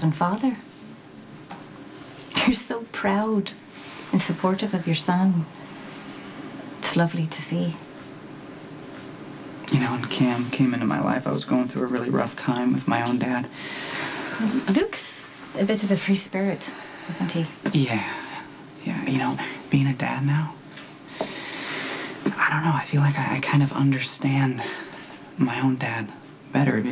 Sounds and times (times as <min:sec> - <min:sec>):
Speech: 0:09.7 - 0:13.5.